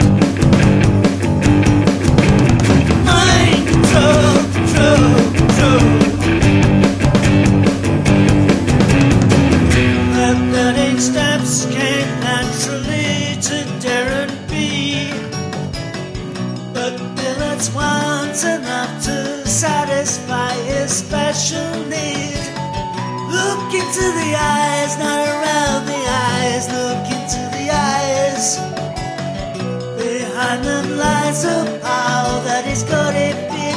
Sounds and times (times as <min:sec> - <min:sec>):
Independent music: 0:00.0 - 0:33.7.